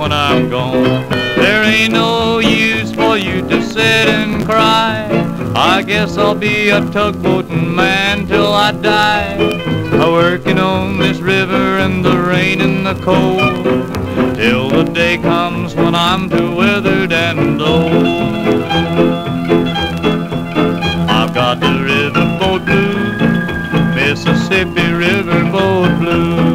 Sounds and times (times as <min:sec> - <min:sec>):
Blues: 0:00.0 - 0:26.5.